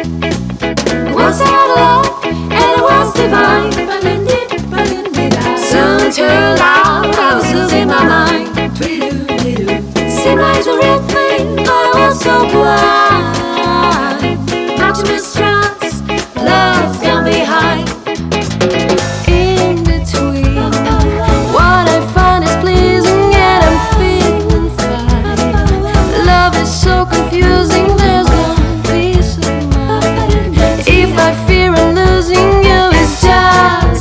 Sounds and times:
Music: 0.0 - 34.0.

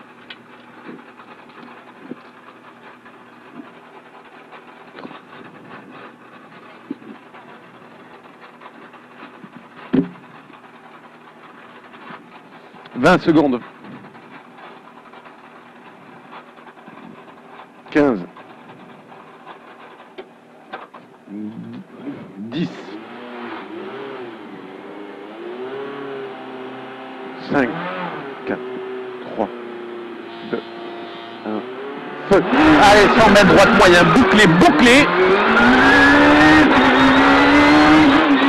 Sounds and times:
Car: 0.0 - 38.4
Accelerating, revving, vroom: 22.6 - 38.4
Speech: 32.3 - 35.1.

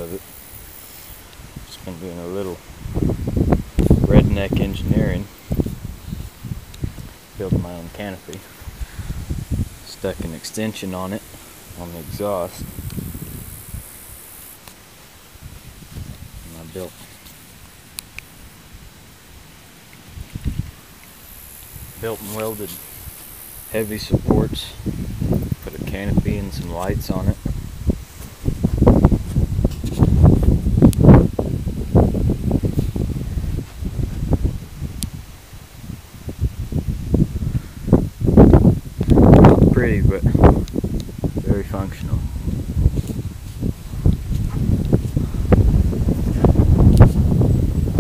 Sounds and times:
Speech: 0.0 - 0.2, 1.7 - 2.6, 4.1 - 5.3, 7.4 - 8.5, 9.8 - 12.7, 16.4 - 17.1, 22.0 - 22.8, 23.7 - 24.8, 25.6 - 27.4, 39.7 - 40.4, 41.4 - 42.3.

